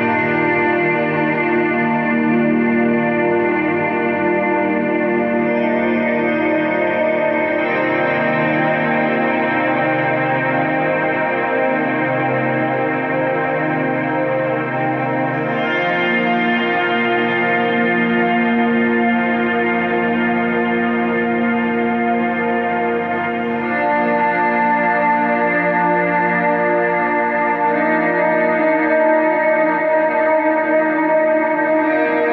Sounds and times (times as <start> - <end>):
Ambient music: 0.0 - 32.3
Guitar: 0.0 - 32.3.